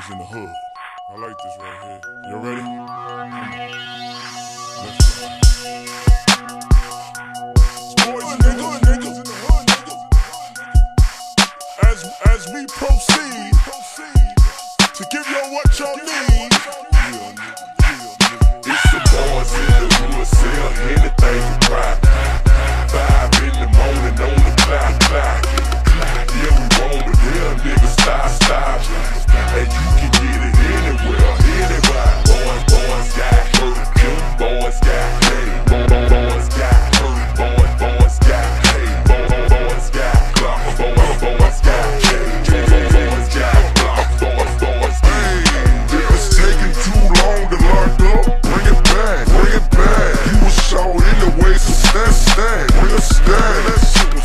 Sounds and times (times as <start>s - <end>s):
Hip hop music: 0.0s - 54.2s.